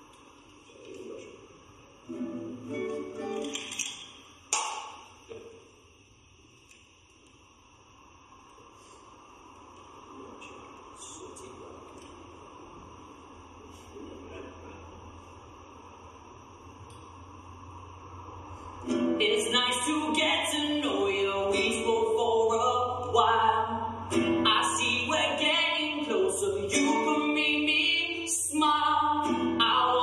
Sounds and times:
Music: 0:02.1 - 0:03.8, 0:23.6 - 0:25.1, 0:29.0 - 0:30.0.

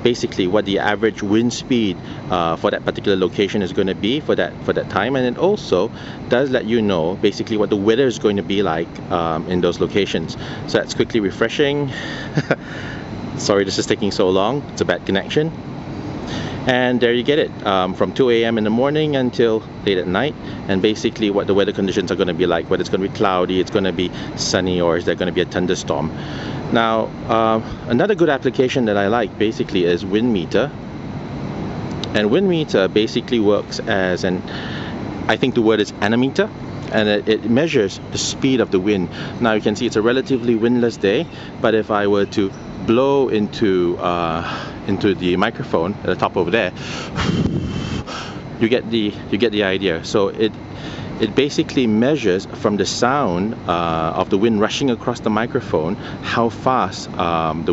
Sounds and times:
Speech: 0:00.0 - 0:12.0, 0:13.4 - 0:15.6, 0:16.6 - 0:30.8, 0:32.0 - 0:34.6, 0:35.3 - 0:46.8, 0:48.6 - 0:50.6, 0:51.2 - 0:57.7.

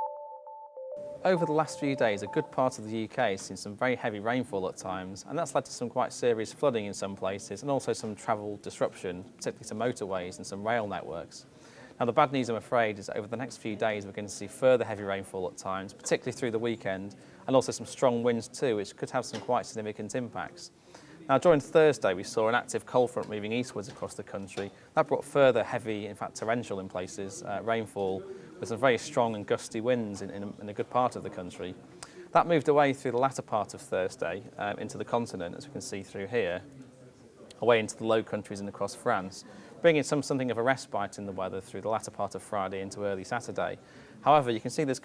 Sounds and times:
Speech: 0:01.2 - 0:45.0.

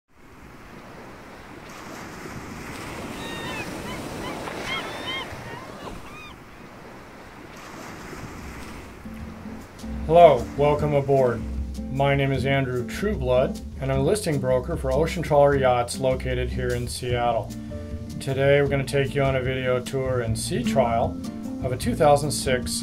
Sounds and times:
Wind: 0:00.1 - 0:22.2
Waves, surf: 0:00.1 - 0:22.8.

